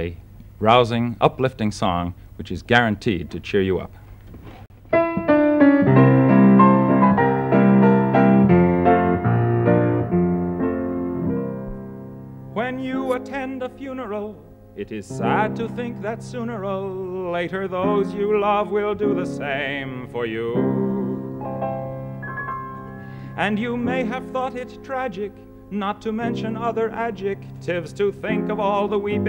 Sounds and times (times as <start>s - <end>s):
Piano: 4.7s - 29.2s.